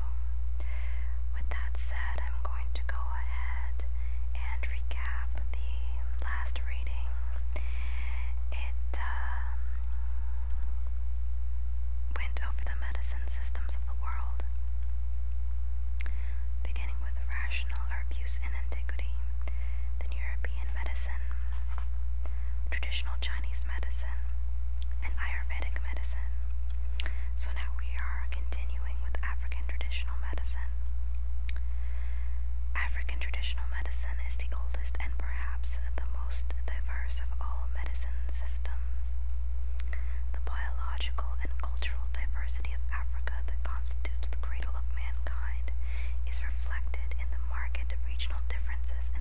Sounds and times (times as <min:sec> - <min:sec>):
Whispering: 0:01.3 - 0:07.5, 0:08.2 - 0:10.7, 0:12.1 - 0:14.5, 0:16.6 - 0:19.3, 0:20.0 - 0:21.9, 0:22.7 - 0:24.3, 0:24.9 - 0:26.4, 0:27.4 - 0:30.8, 0:32.8 - 0:39.1, 0:40.3 - 0:49.2.